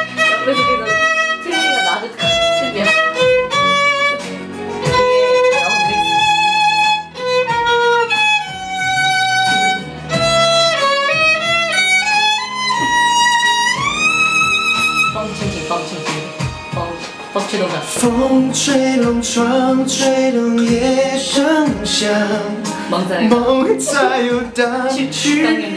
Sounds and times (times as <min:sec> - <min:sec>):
Violin, fiddle: 0:00.0 - 0:15.8
Speech: 0:00.3 - 0:03.1, 0:05.5 - 0:06.3, 0:15.2 - 0:18.1, 0:22.9 - 0:25.7
Singing: 0:17.8 - 0:25.7.